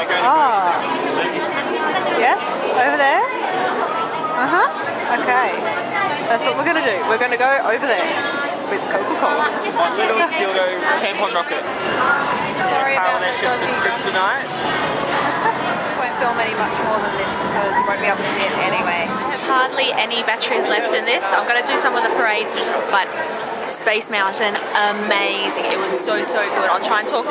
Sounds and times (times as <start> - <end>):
Chatter: 0.0 - 27.3
Inside, public space: 0.0 - 27.3
Speech: 16.0 - 27.3.